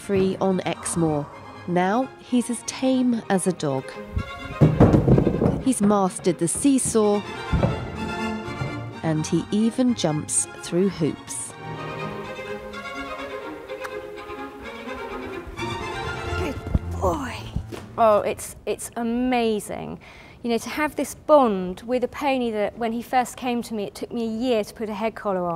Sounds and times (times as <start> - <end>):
Music: 0.0 - 19.0
Speech: 9.0 - 11.5, 16.4 - 25.5.